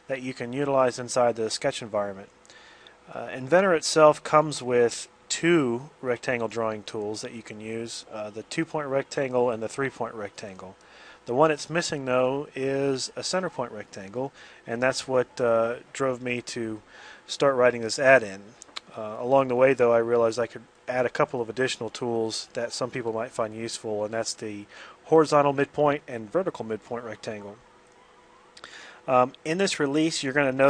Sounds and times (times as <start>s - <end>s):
Speech: 0.0s - 2.3s, 3.1s - 27.6s, 29.1s - 30.7s.